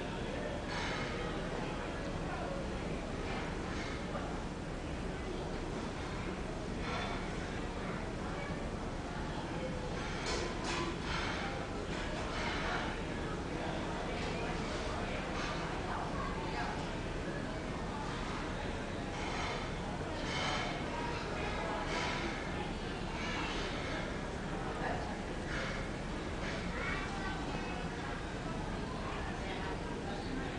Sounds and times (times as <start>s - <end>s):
Speech: 0.0s - 30.5s.